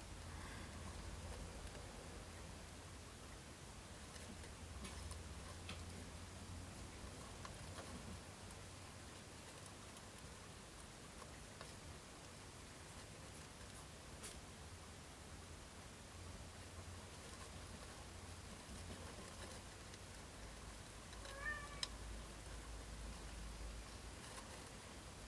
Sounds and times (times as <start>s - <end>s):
Patter: 0.0s - 25.2s.